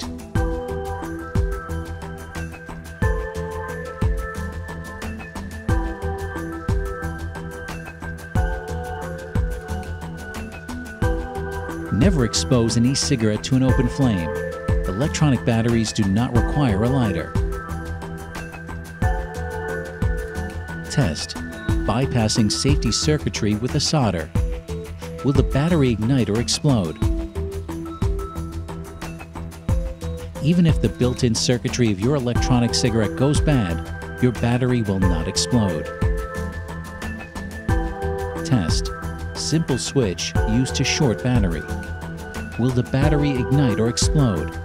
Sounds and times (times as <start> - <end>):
Music: 0.0 - 44.6
Speech: 11.9 - 14.3, 14.9 - 17.3, 20.9 - 21.3, 21.9 - 24.3, 25.2 - 27.0, 30.4 - 35.9, 38.4 - 41.7, 42.6 - 44.5.